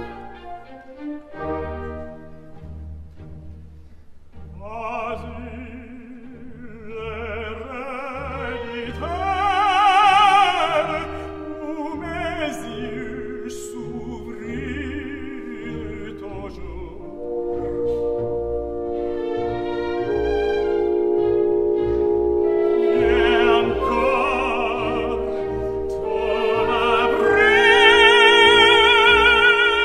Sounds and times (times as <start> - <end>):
Inside, large room or hall: 0.0 - 29.8
Opera: 0.0 - 29.8
Orchestra: 0.0 - 29.8.